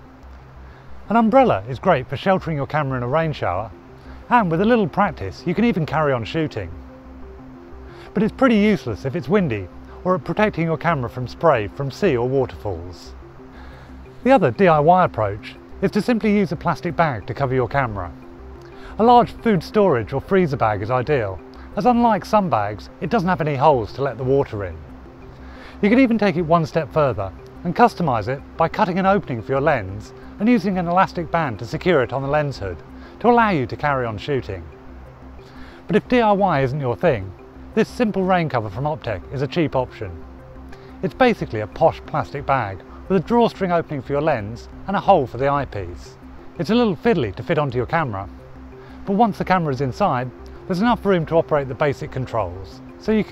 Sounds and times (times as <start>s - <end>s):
Music: 0.0s - 53.3s
Speech: 1.1s - 3.7s, 4.3s - 6.8s, 8.2s - 13.1s, 14.2s - 18.2s, 19.0s - 24.8s, 25.8s - 34.7s, 35.9s - 40.2s, 41.0s - 48.3s, 49.1s - 53.3s.